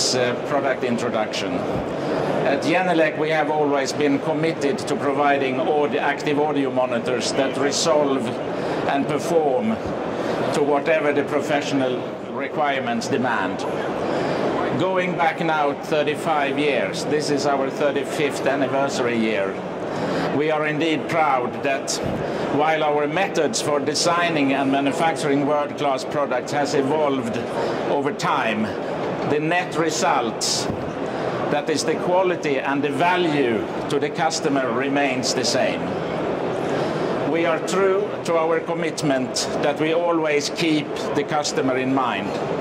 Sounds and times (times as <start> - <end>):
Speech: 0.0 - 1.8, 2.4 - 9.9, 10.5 - 13.9, 14.6 - 19.6, 20.4 - 30.8, 31.5 - 36.0, 37.3 - 42.4.